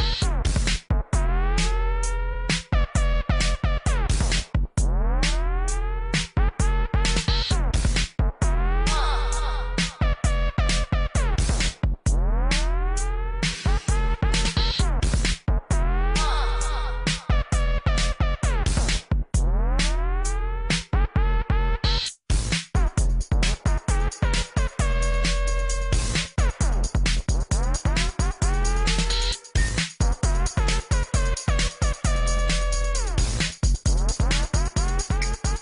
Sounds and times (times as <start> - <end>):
Music: 0.0 - 35.6.